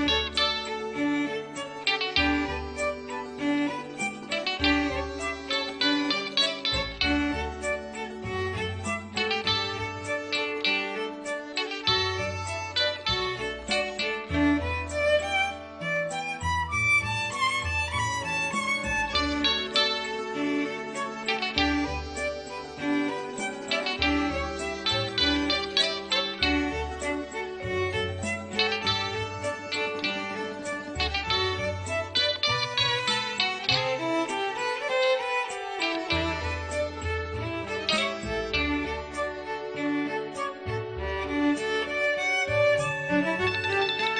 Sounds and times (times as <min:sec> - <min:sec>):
Violin, fiddle: 0:00.0 - 0:44.1.